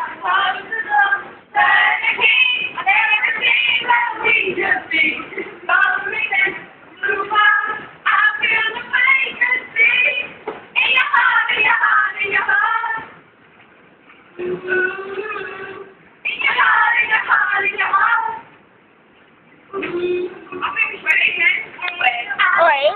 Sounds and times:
Female singing: 0:00.0 - 0:13.2, 0:14.4 - 0:18.5, 0:19.8 - 0:22.9
Speech: 0:22.5 - 0:22.9.

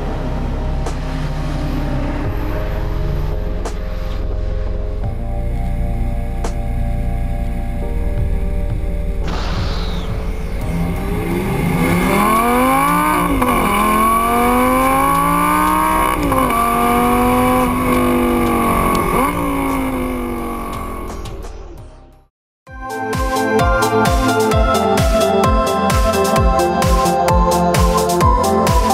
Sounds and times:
Music: 0:00.0 - 0:28.9.

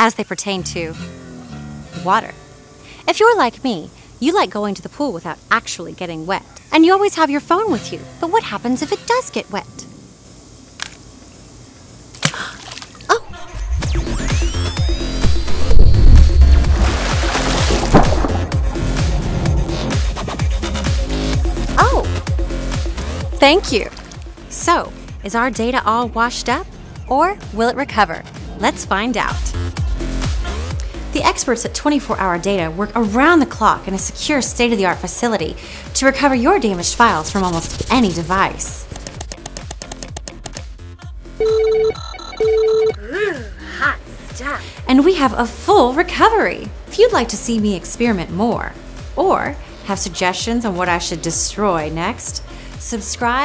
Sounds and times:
Speech: 0:00.0 - 0:01.0, 0:02.0 - 0:02.4, 0:03.1 - 0:09.8, 0:21.8 - 0:22.1, 0:23.4 - 0:23.9, 0:24.5 - 0:29.6, 0:31.1 - 0:38.8, 0:43.1 - 0:53.4
Music: 0:00.0 - 0:12.0, 0:13.2 - 0:53.4.

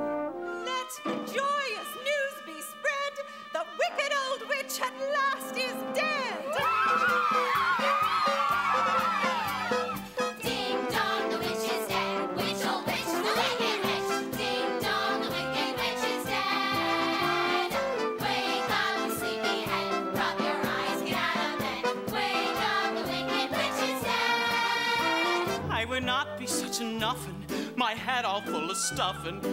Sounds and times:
Music: 0:00.0 - 0:29.5.

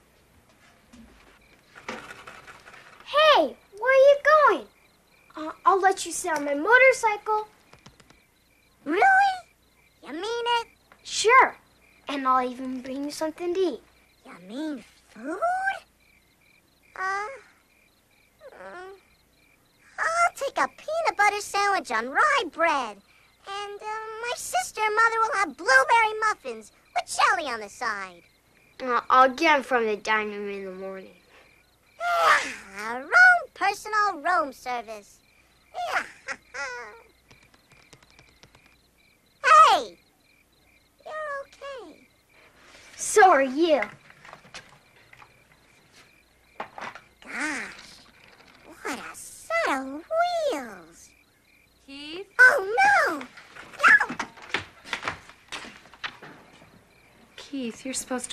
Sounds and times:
Speech: 0:03.1 - 0:04.7, 0:05.4 - 0:07.5, 0:08.8 - 0:15.9, 0:20.0 - 0:28.2, 0:28.8 - 0:31.2, 0:32.0 - 0:35.2, 0:39.4 - 0:40.0, 0:41.0 - 0:42.0, 0:43.0 - 0:43.9, 0:48.7 - 0:51.1, 0:51.9 - 0:54.1, 0:57.4 - 0:58.3.

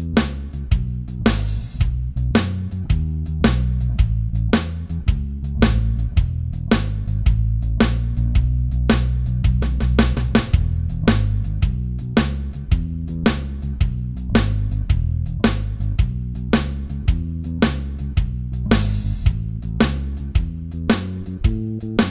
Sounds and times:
Music: 0:00.0 - 0:22.1.

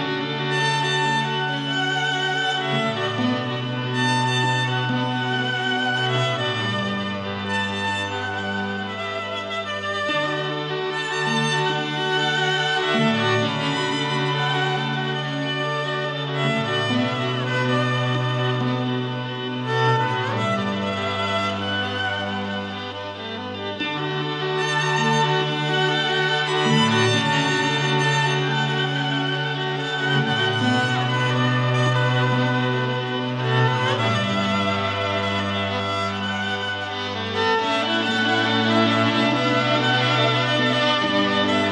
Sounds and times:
Violin, fiddle: 0:00.0 - 0:41.7.

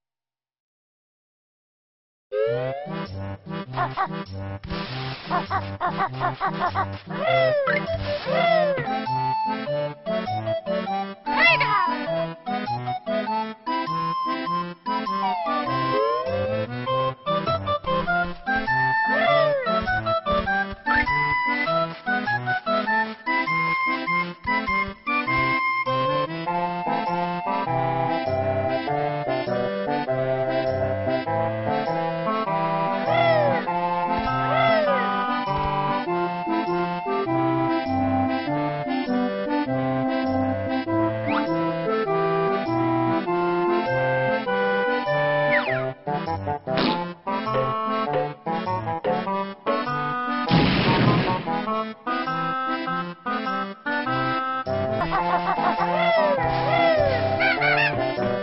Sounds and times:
Music: 0:02.4 - 0:58.4
Speech: 0:11.3 - 0:12.0, 0:16.0 - 0:16.5, 0:19.1 - 0:19.7, 0:33.1 - 0:33.7, 0:56.0 - 0:58.0.

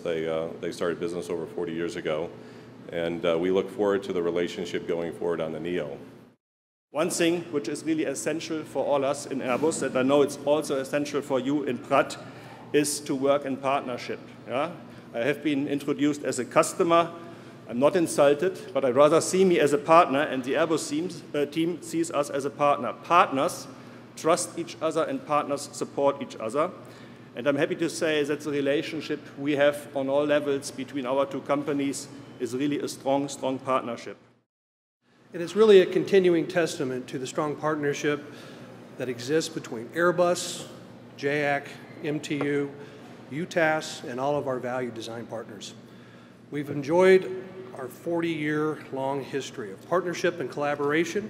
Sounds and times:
Speech: 0:00.0 - 0:06.1, 0:07.0 - 0:26.8, 0:27.4 - 0:34.2, 0:35.4 - 0:38.3, 0:39.0 - 0:45.8, 0:46.5 - 0:51.2.

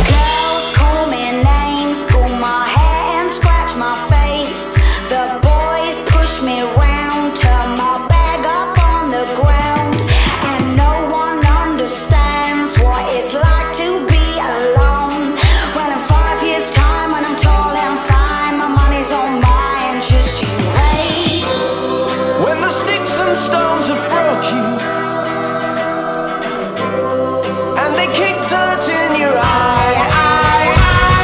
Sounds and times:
Music: 0:00.0 - 0:31.2.

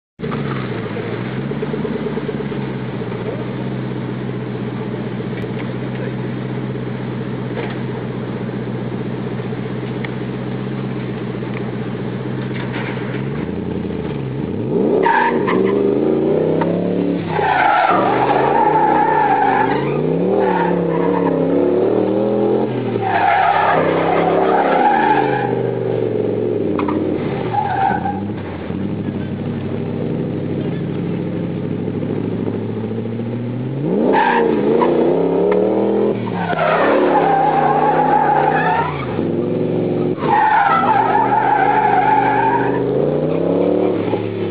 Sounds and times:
Vehicle: 0:00.2 - 0:44.5.

